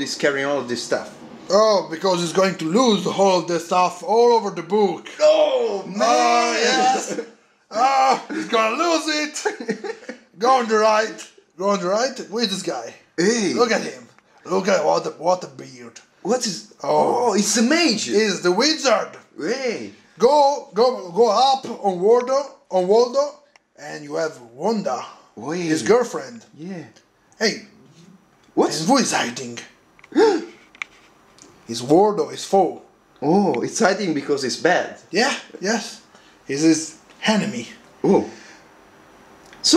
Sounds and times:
Speech: 0:00.0 - 0:09.7, 0:10.4 - 0:30.5, 0:31.7 - 0:38.4
Inside, small room: 0:00.0 - 0:39.7.

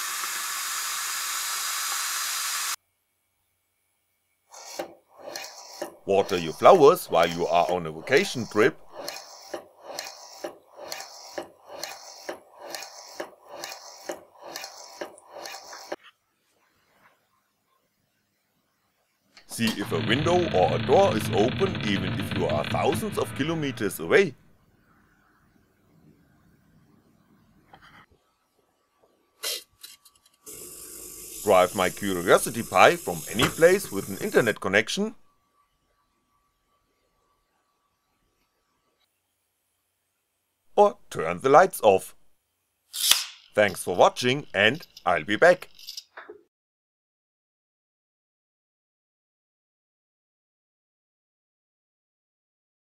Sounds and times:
Inside, small room: 0:00.0 - 0:46.5
Speech: 0:06.1 - 0:08.8, 0:19.5 - 0:24.4, 0:31.4 - 0:35.2, 0:40.7 - 0:42.2, 0:43.6 - 0:45.7.

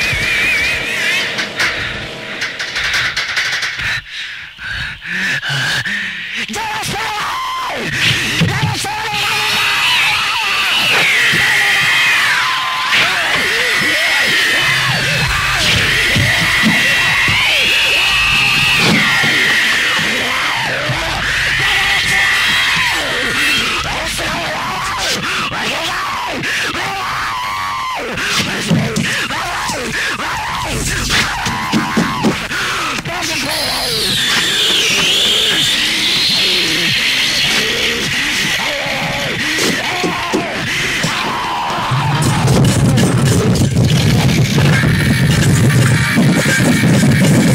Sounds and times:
Music: 0:00.0 - 0:04.9, 0:07.9 - 0:47.5.

